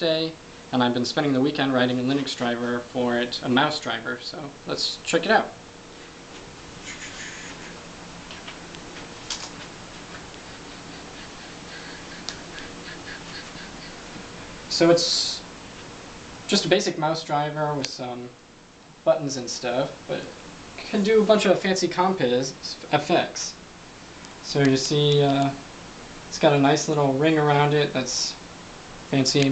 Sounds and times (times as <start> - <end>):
Speech: 0.0 - 5.6, 14.7 - 15.5, 16.5 - 18.4, 19.1 - 23.6, 24.4 - 25.6, 26.3 - 28.4, 29.1 - 29.5.